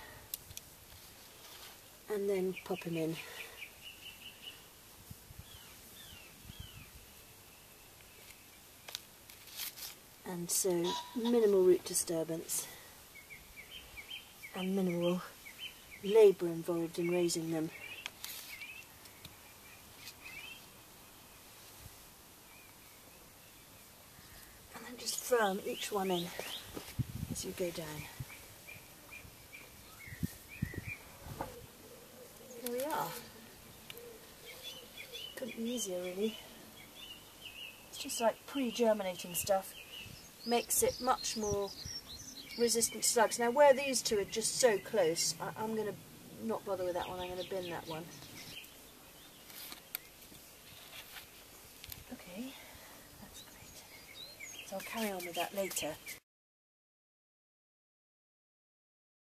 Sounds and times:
Speech: 0:02.1 - 0:03.4, 0:10.2 - 0:12.8, 0:14.5 - 0:15.4, 0:16.0 - 0:17.8, 0:24.8 - 0:26.5, 0:27.4 - 0:28.2, 0:32.6 - 0:33.3, 0:35.4 - 0:36.5, 0:38.0 - 0:39.8, 0:40.5 - 0:41.8, 0:42.6 - 0:48.2, 0:52.1 - 0:52.7, 0:54.7 - 0:56.1.

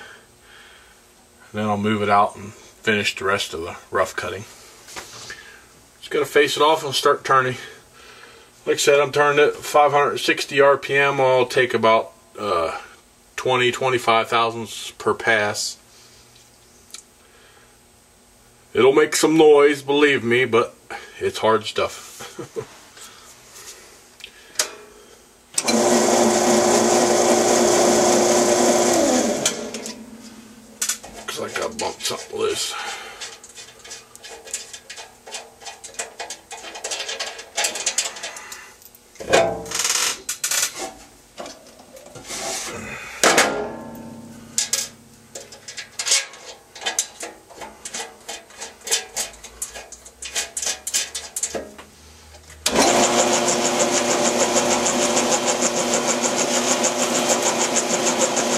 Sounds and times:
Tools: 0:43.2 - 0:51.8.

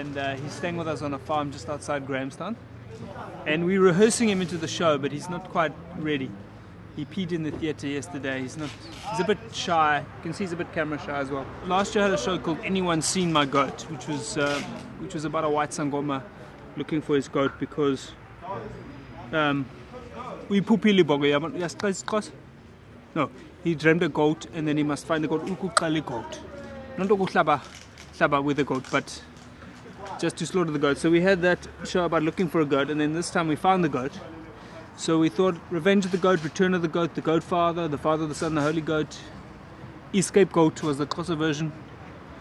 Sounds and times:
Speech: 0:00.0 - 0:06.4, 0:07.0 - 0:22.4, 0:23.1 - 0:29.3, 0:29.9 - 0:39.4, 0:40.2 - 0:42.2.

